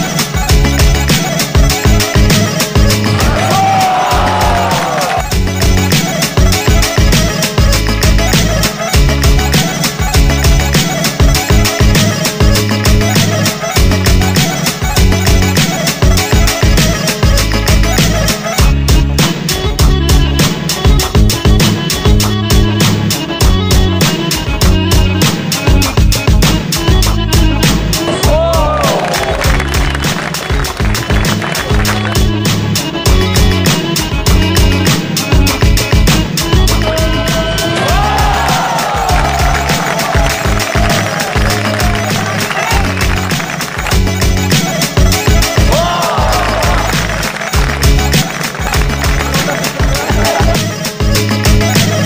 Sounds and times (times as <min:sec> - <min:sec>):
Music: 0:00.0 - 0:52.0.